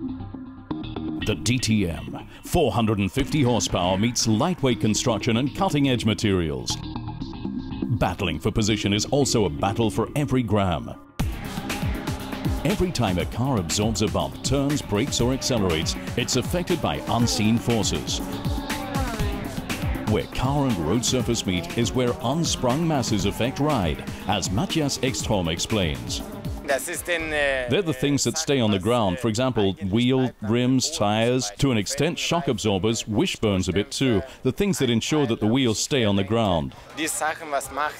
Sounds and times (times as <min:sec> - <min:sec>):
Music: 0:00.0 - 0:30.4, 0:31.5 - 0:37.9
Speech: 0:01.2 - 0:06.8, 0:07.9 - 0:11.0, 0:12.7 - 0:18.2, 0:20.1 - 0:37.9.